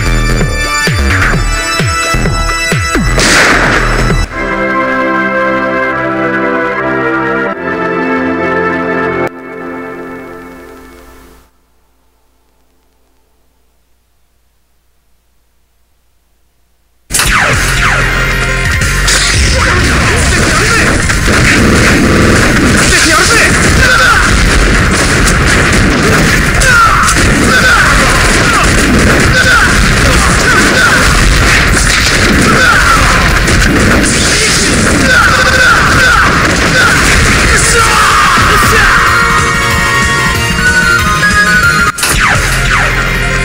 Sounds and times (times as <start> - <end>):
Speech: 19.5 - 21.0, 22.8 - 24.3, 26.6 - 31.2, 32.4 - 33.3, 34.3 - 39.1.